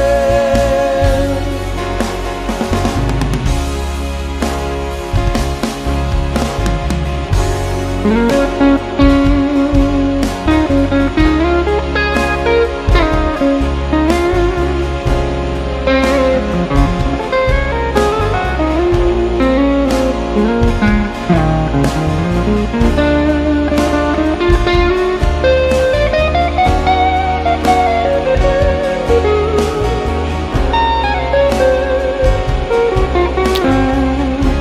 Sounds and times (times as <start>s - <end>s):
Music: 0.0s - 34.6s.